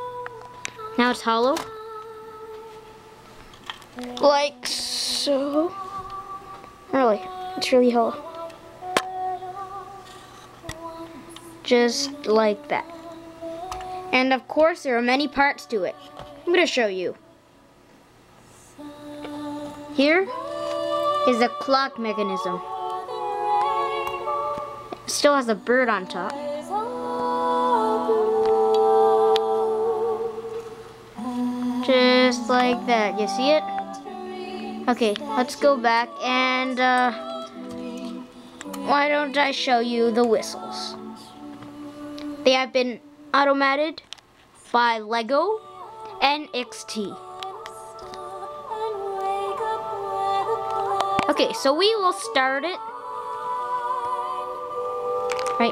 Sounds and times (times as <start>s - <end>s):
Music: 0.0s - 17.7s, 18.5s - 43.8s, 45.0s - 55.7s
Speech: 1.0s - 1.6s, 4.0s - 5.7s, 6.9s - 8.2s, 11.7s - 12.8s, 14.2s - 17.2s, 25.1s - 26.3s, 31.9s - 33.7s, 34.9s - 37.2s, 38.9s - 41.0s, 44.7s - 45.6s, 51.2s - 52.8s.